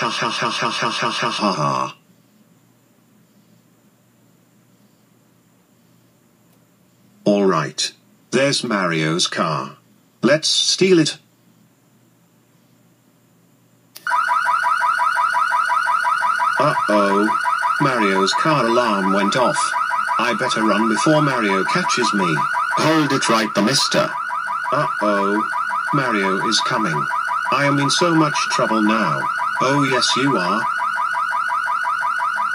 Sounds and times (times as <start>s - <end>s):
Speech: 0.0s - 2.0s, 7.3s - 11.2s, 16.6s - 30.7s.